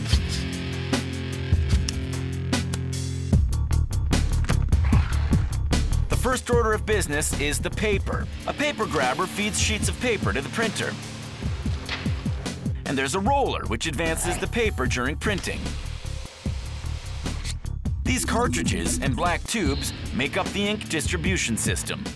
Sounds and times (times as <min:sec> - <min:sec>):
Music: 0:00.0 - 0:22.1
Speech: 0:06.1 - 0:11.0, 0:12.8 - 0:15.7, 0:18.1 - 0:22.1.